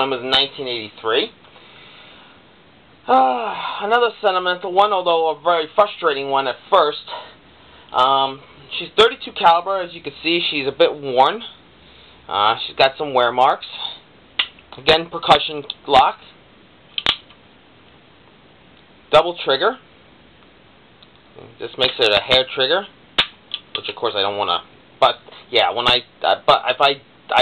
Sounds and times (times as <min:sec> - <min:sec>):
Speech: 0:00.0 - 0:01.4, 0:03.1 - 0:07.3, 0:07.9 - 0:11.6, 0:12.3 - 0:14.0, 0:14.7 - 0:16.4, 0:19.1 - 0:19.9, 0:21.4 - 0:22.9, 0:23.8 - 0:27.4.